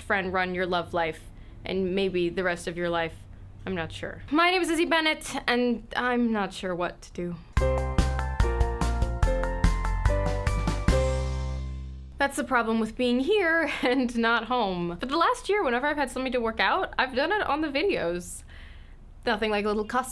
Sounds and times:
Speech: 0.0s - 7.5s, 12.2s - 18.4s, 19.2s - 20.1s.

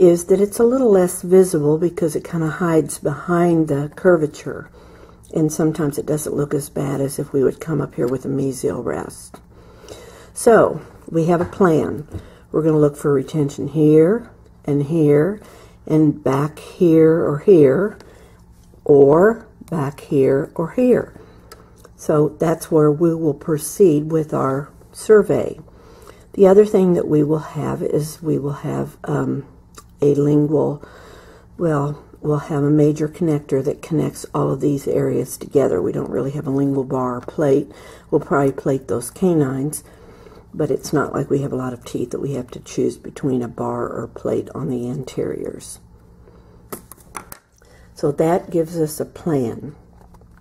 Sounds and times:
Speech: 0.0s - 4.7s, 5.3s - 9.4s, 10.4s - 18.0s, 18.8s - 21.2s, 21.9s - 25.6s, 26.4s - 30.8s, 31.6s - 39.9s, 40.6s - 45.8s, 48.0s - 49.8s.

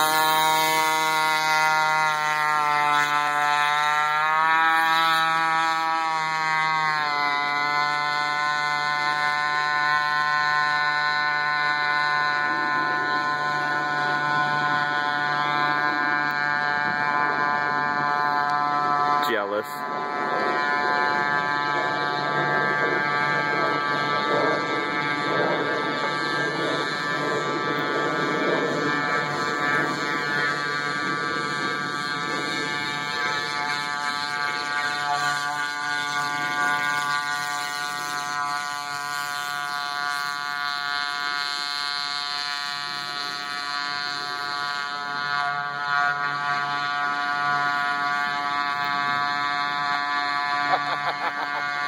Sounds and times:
Boat, Water vehicle: 0.0s - 51.8s.

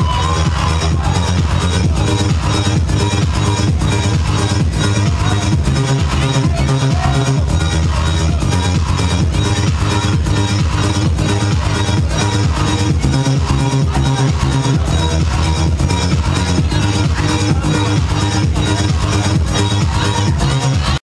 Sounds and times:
Music: 0.0s - 21.0s.

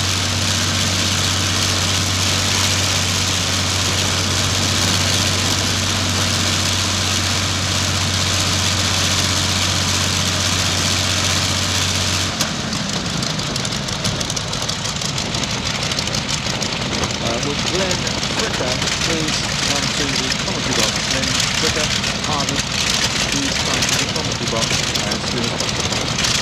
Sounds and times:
Propeller, airscrew: 0.0s - 26.4s.

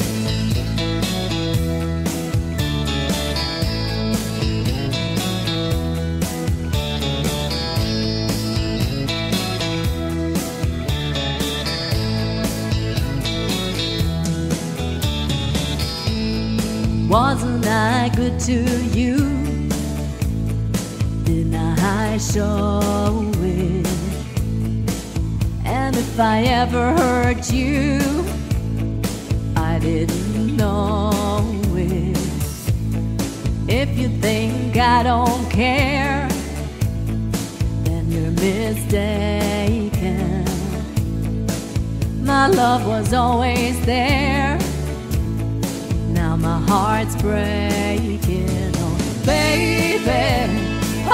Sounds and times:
Music: 0.0s - 51.1s
Female singing: 17.1s - 19.6s, 21.3s - 24.2s, 25.6s - 28.3s, 29.6s - 32.5s, 33.7s - 36.5s, 37.9s - 40.8s, 42.2s - 44.8s, 46.1s - 51.1s.

